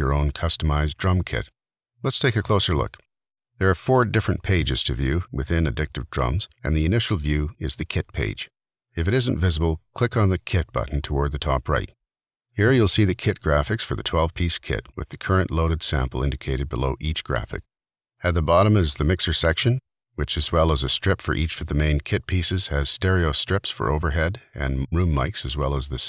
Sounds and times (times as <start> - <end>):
Speech: 0.0 - 12.0, 12.6 - 26.0.